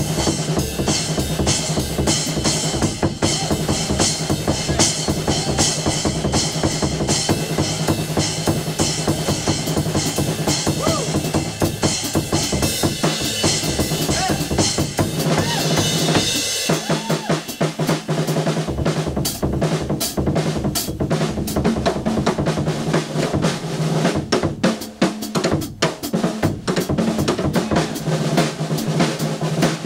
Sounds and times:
Drum roll: 0:00.0 - 0:29.8.

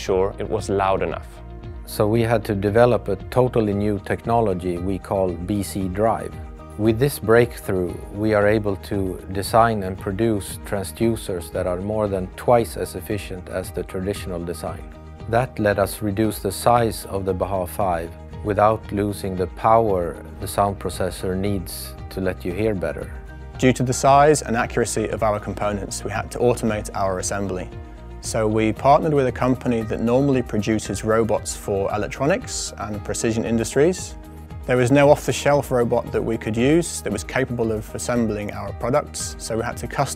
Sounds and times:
Music: 0:00.0 - 0:40.1
Speech: 0:00.0 - 0:40.1.

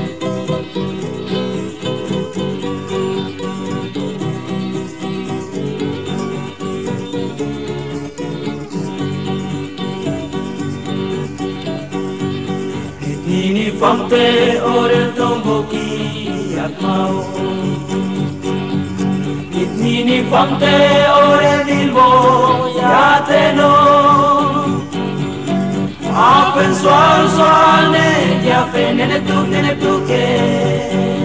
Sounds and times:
Music: 0:00.0 - 0:31.2.

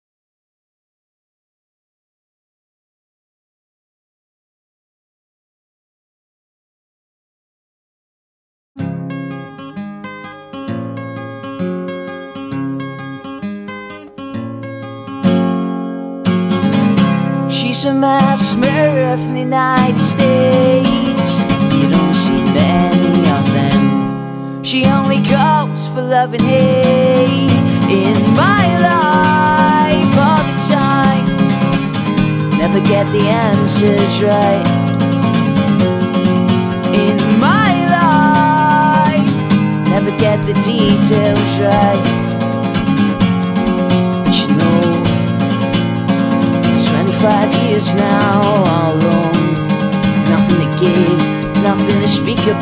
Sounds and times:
Music: 0:08.8 - 0:52.6
Female singing: 0:17.5 - 0:23.9, 0:24.6 - 0:31.4, 0:32.6 - 0:34.7, 0:36.9 - 0:39.3, 0:39.9 - 0:42.2, 0:44.3 - 0:45.2, 0:46.8 - 0:49.6, 0:50.2 - 0:52.6.

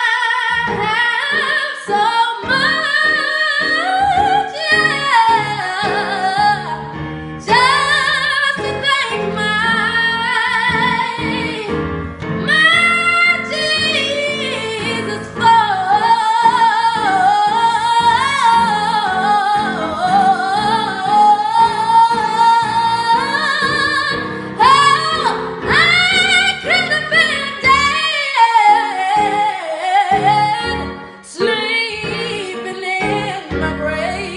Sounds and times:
Female singing: 0:00.0 - 0:06.8, 0:07.4 - 0:11.7, 0:12.5 - 0:34.3
Music: 0:00.0 - 0:34.3.

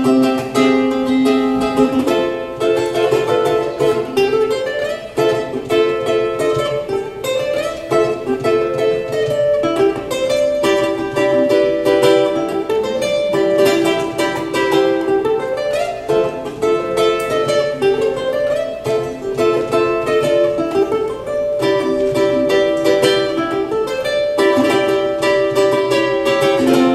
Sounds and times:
Ukulele: 0:00.0 - 0:26.9.

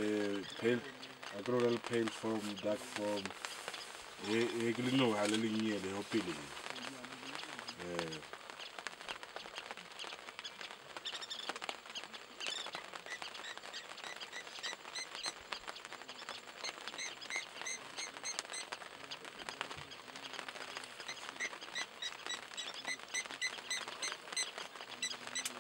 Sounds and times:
Speech: 0:00.0 - 0:03.3, 0:04.2 - 0:08.3.

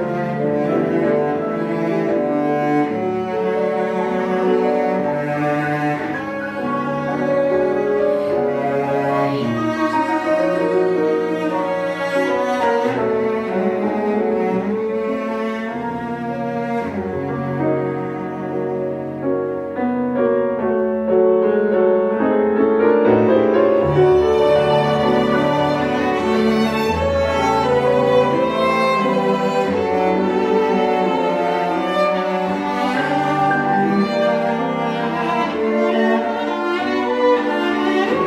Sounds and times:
Violin, fiddle: 0:00.0 - 0:18.9, 0:23.2 - 0:38.2
Cello: 0:00.0 - 0:38.2
Classical music: 0:00.0 - 0:38.2
Orchestra: 0:00.0 - 0:38.2
Piano: 0:00.0 - 0:38.2.

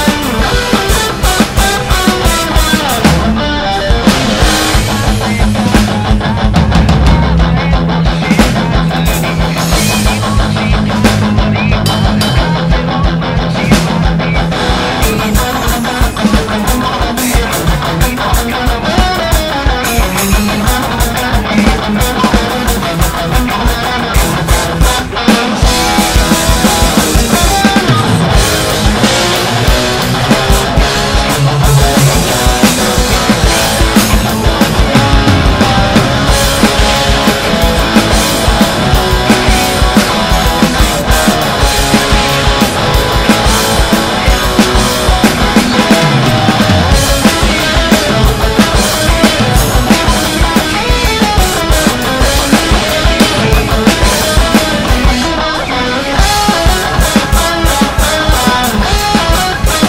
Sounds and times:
Bass drum: 0:00.0 - 0:55.2
Drum kit: 0:00.0 - 0:59.8.

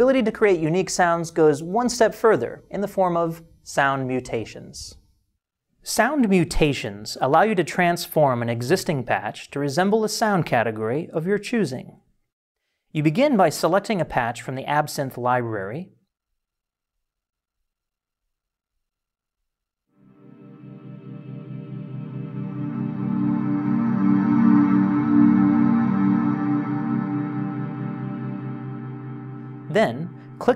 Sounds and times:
Speech: 0:00.0 - 0:05.0, 0:05.8 - 0:12.0, 0:13.0 - 0:16.0, 0:29.7 - 0:30.5.

